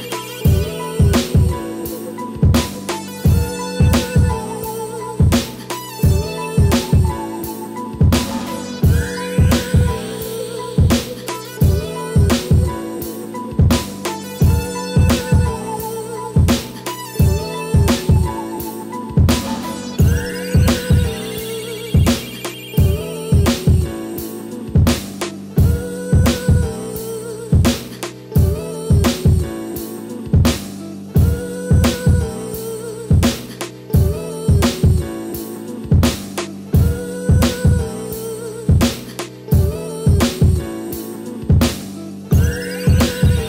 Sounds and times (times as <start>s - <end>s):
Music: 0.0s - 43.4s.